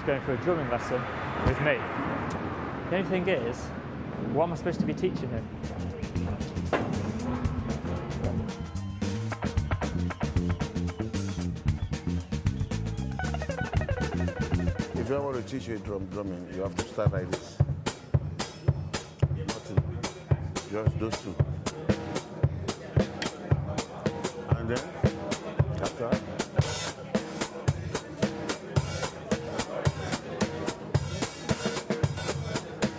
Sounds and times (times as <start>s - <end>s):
Speech: 0.0s - 1.8s, 2.9s - 6.7s, 14.9s - 17.6s, 19.2s - 32.9s
Music: 5.4s - 32.9s.